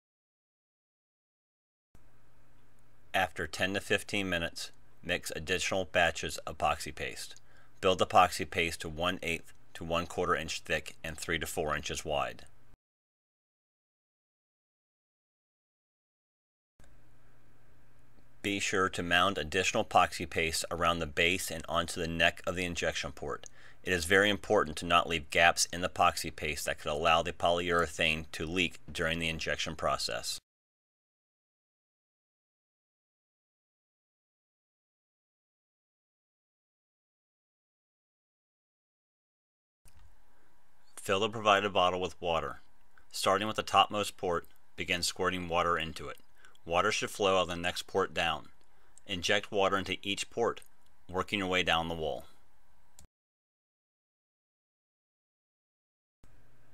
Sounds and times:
Speech: 0:03.2 - 0:12.5, 0:18.5 - 0:30.4, 0:41.0 - 0:48.5, 0:49.1 - 0:52.4.

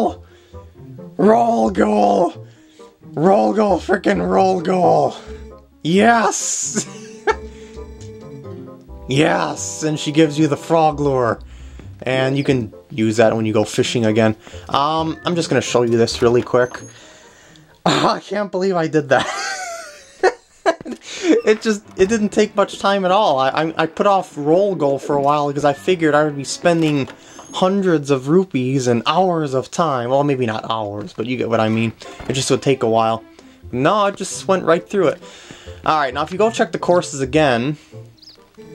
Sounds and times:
Speech: 0:00.0 - 0:00.2, 0:01.2 - 0:02.4, 0:03.2 - 0:05.2, 0:05.9 - 0:06.9, 0:09.1 - 0:11.4, 0:12.0 - 0:16.9, 0:17.9 - 0:19.3, 0:21.3 - 0:35.2, 0:35.8 - 0:37.8
Music: 0:00.0 - 0:38.7.

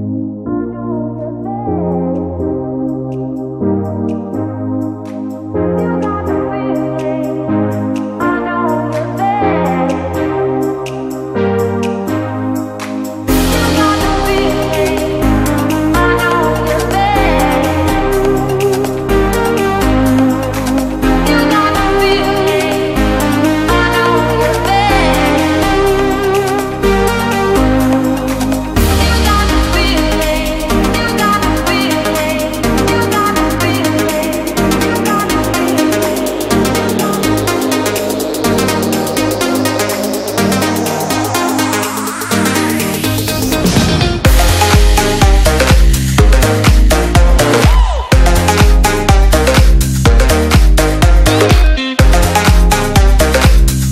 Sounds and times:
Electronica: 0:00.0 - 0:53.9.

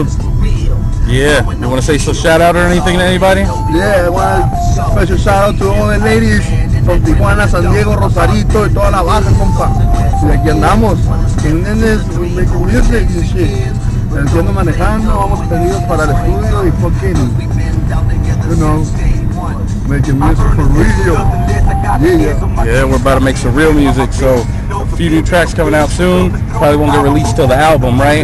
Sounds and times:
Speech: 0:00.0 - 0:13.6, 0:14.2 - 0:17.3, 0:19.9 - 0:28.2
Music: 0:00.0 - 0:28.2.

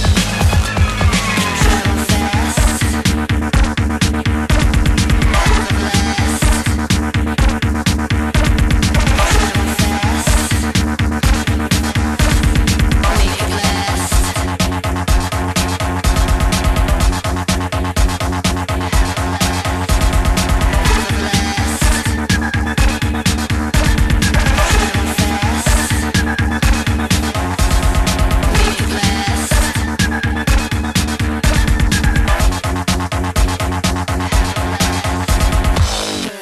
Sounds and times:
Dance music: 0:00.0 - 0:36.4
Electronica: 0:00.0 - 0:36.4
House music: 0:00.0 - 0:36.4.

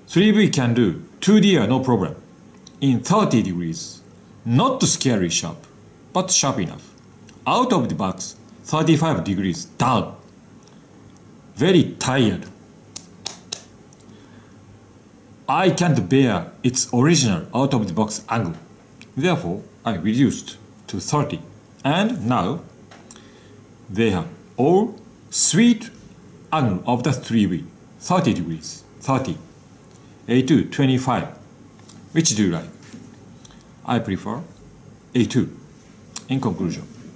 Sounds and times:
Inside, small room: 0:00.0 - 0:37.1
Speech: 0:00.1 - 0:10.3, 0:11.6 - 0:12.6, 0:15.5 - 0:22.7, 0:23.9 - 0:29.5, 0:30.3 - 0:31.4, 0:32.1 - 0:32.9, 0:33.8 - 0:35.6, 0:36.2 - 0:37.1.

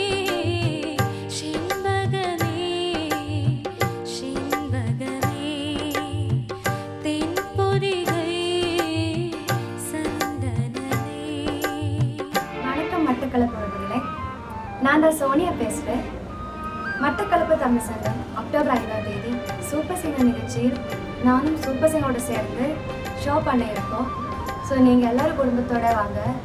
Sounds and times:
Traditional music: 0:12.2 - 0:26.4
Speech: 0:12.7 - 0:14.1, 0:14.8 - 0:16.1, 0:17.0 - 0:24.1, 0:24.7 - 0:26.4.

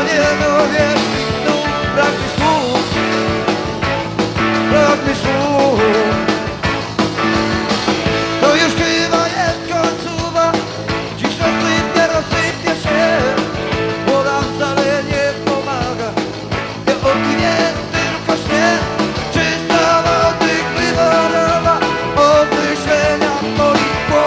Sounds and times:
Ska: 0:00.0 - 0:24.2
Singing: 0:16.9 - 0:24.2.

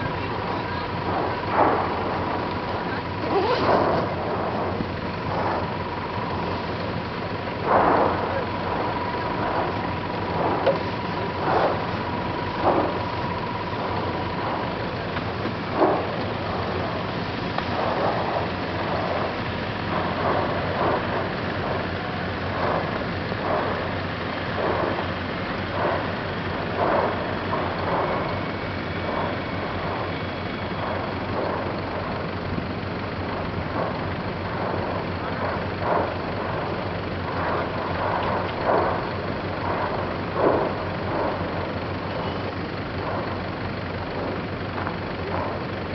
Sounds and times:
Eruption: 0:00.0 - 0:45.9.

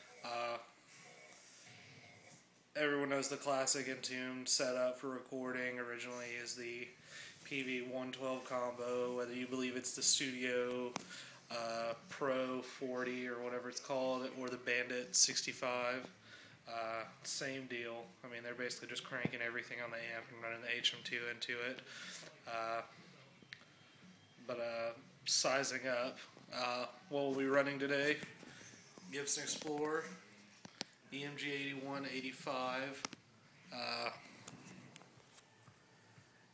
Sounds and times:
Speech: 0:00.2 - 0:00.7, 0:02.8 - 0:16.1, 0:16.7 - 0:23.0, 0:24.5 - 0:28.3, 0:29.1 - 0:30.2, 0:31.1 - 0:33.0.

